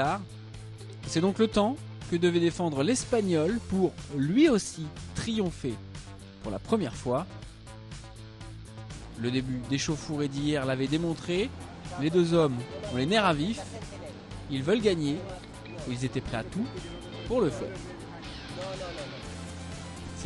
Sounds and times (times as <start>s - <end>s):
Speech: 0.0s - 0.3s, 1.1s - 5.8s, 6.4s - 7.3s, 9.2s - 19.2s
Music: 0.0s - 20.2s.